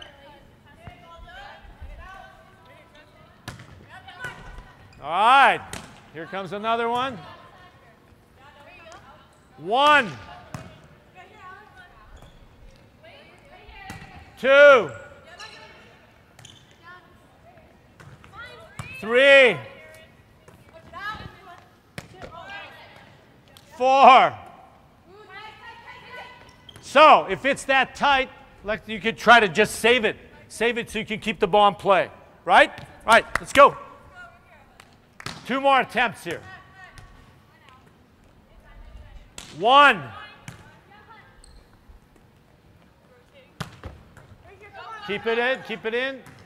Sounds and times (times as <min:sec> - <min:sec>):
Inside, large room or hall: 0:00.0 - 0:46.4.